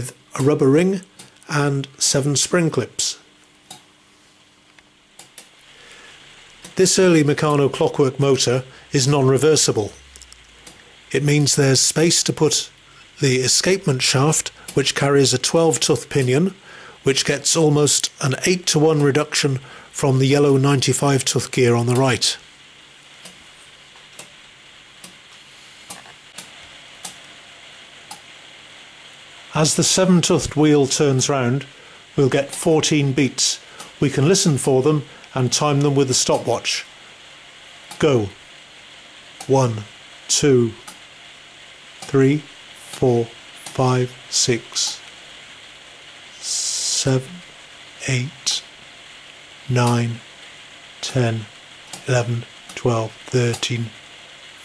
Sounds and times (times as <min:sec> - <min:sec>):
Speech: 0:00.0 - 0:03.3, 0:06.8 - 0:10.0, 0:11.1 - 0:22.4, 0:29.5 - 0:36.9, 0:38.0 - 0:38.4, 0:39.4 - 0:40.9, 0:42.1 - 0:45.0, 0:46.4 - 0:48.7, 0:49.7 - 0:50.3, 0:51.0 - 0:54.0.